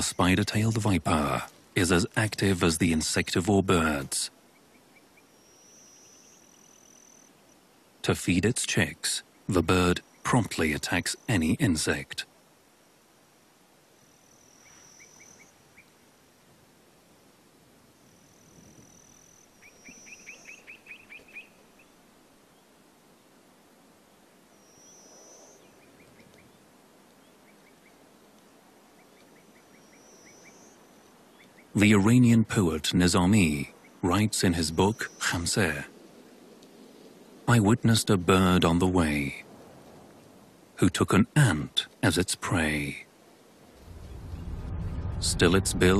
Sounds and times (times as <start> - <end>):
Outside, rural or natural: 0.0 - 45.9.